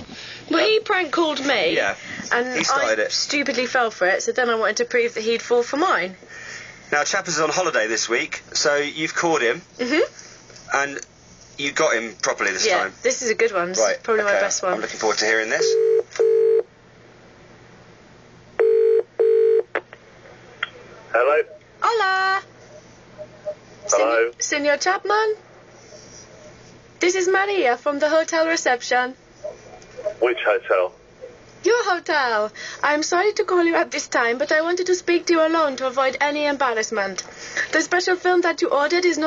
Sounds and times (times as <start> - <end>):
Radio: 20.6 - 21.7, 29.4 - 31.4.